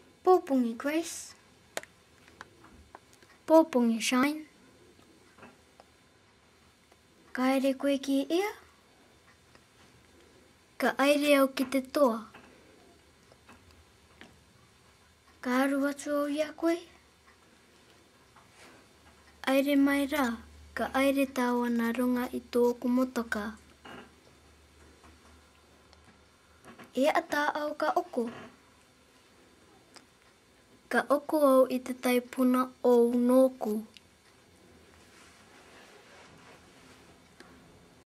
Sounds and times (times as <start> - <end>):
Speech: 0.2 - 1.4, 3.5 - 4.5, 7.3 - 8.7, 10.8 - 12.4, 15.4 - 17.0, 19.4 - 23.6, 26.9 - 28.5, 30.9 - 34.0.